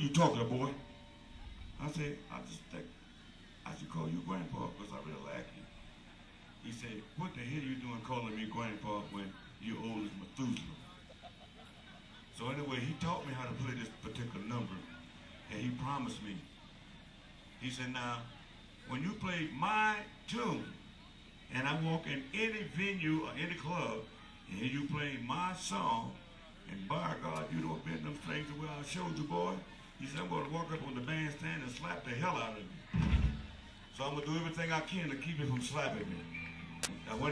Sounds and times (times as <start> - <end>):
Speech: 0.0 - 37.3.